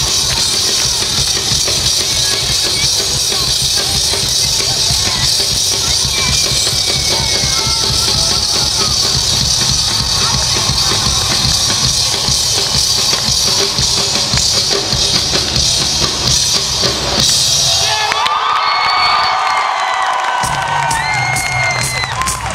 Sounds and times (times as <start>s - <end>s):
Music: 0.0s - 22.5s.